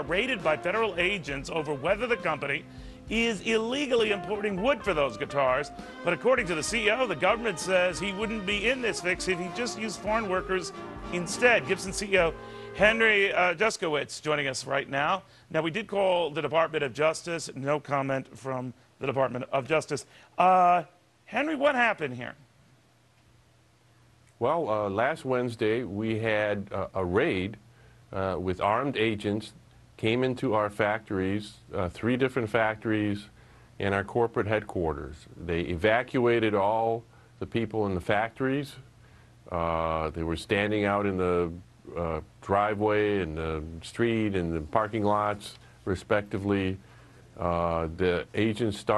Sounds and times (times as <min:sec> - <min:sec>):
Speech: 0:00.0 - 0:22.4, 0:24.4 - 0:38.9, 0:39.5 - 0:46.8, 0:47.4 - 0:48.9.